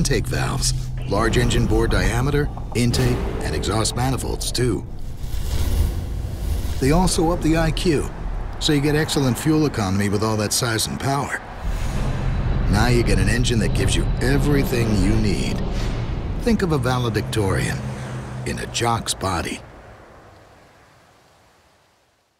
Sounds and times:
Speech: 0.0s - 4.8s, 6.8s - 11.5s, 12.7s - 15.6s, 16.4s - 17.8s, 18.4s - 19.6s
Vehicle: 5.8s - 20.9s.

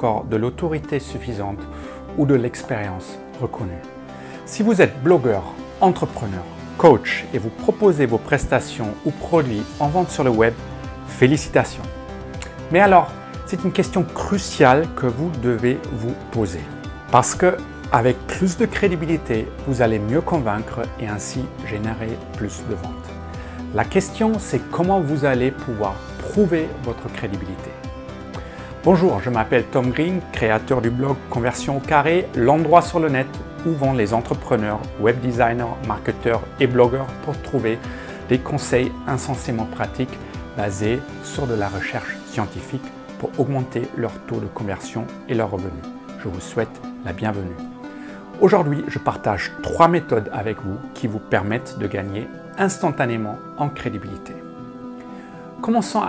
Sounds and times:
Speech: 0.0s - 1.6s, 2.2s - 3.9s, 4.5s - 11.9s, 12.7s - 23.0s, 23.7s - 27.8s, 28.8s - 47.6s, 48.4s - 54.4s, 55.6s - 56.0s
Music: 0.0s - 56.0s.

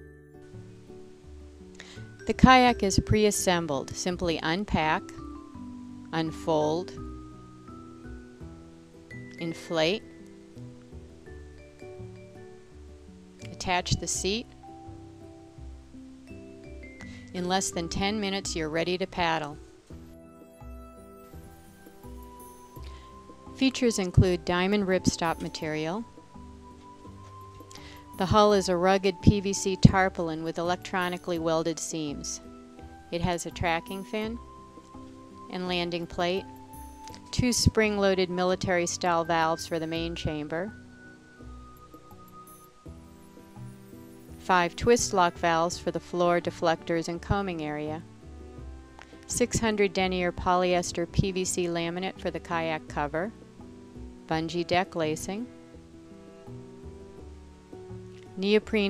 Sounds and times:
Music: 0.0s - 58.9s
Speech: 2.3s - 5.1s, 6.2s - 7.0s, 9.4s - 10.0s, 13.5s - 14.5s, 17.4s - 19.6s, 23.6s - 26.0s, 28.2s - 32.4s, 33.2s - 34.4s, 35.5s - 36.4s, 37.3s - 40.7s, 44.5s - 48.0s, 49.3s - 53.3s, 54.3s - 55.5s, 58.4s - 58.9s.

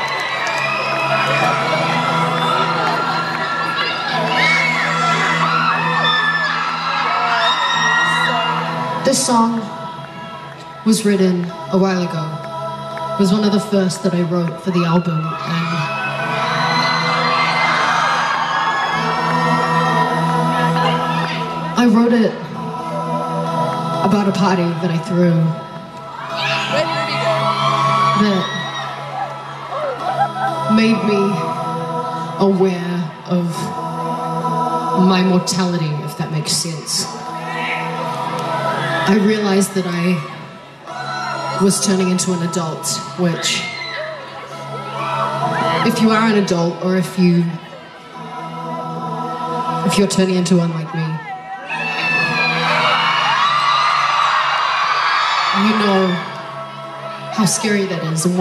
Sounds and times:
Music: 0.0s - 58.4s.

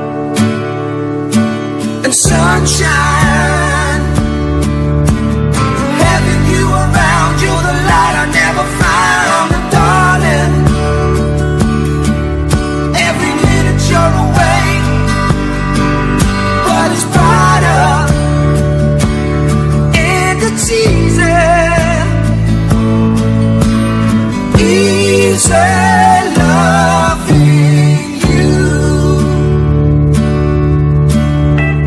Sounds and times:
Music: 0.0s - 31.8s.

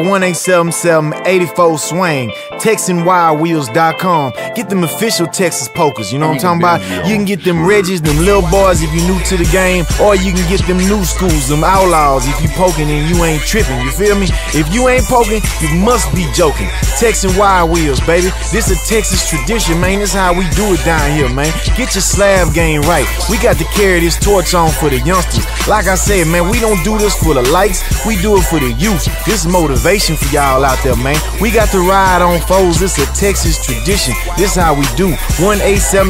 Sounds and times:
Music: 0.0s - 36.0s.

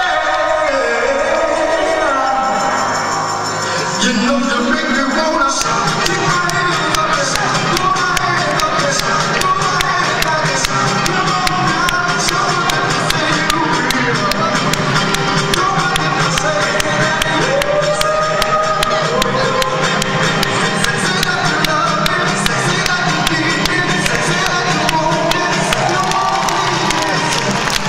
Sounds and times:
Music: 0.0s - 27.8s.

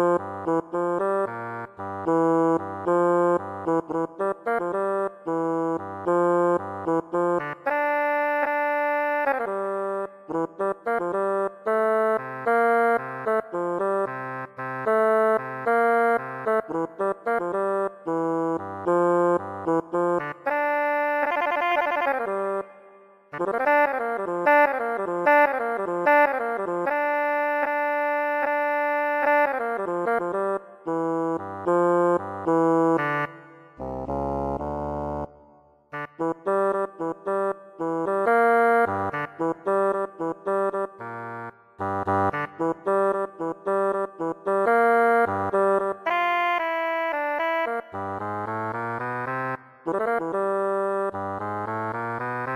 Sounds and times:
Music: 0.0s - 52.5s.

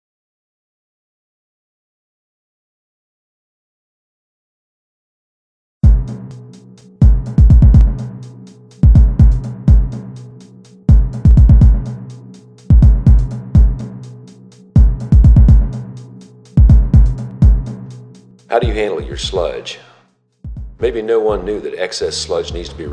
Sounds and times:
Drum machine: 5.8s - 19.8s, 20.5s - 21.5s.

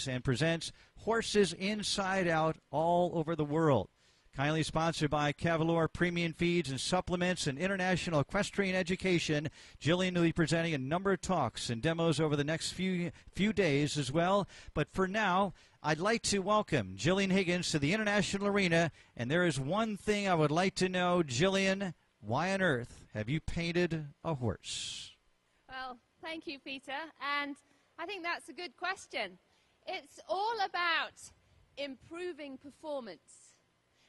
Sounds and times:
Speech: 0.0s - 33.6s.

